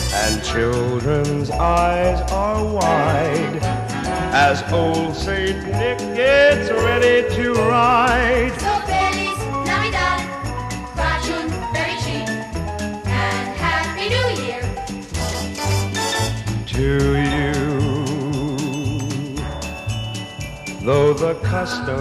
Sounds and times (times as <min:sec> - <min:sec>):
Jingle bell: 0:00.0 - 0:22.0
Jingle, tinkle: 0:00.0 - 0:22.0.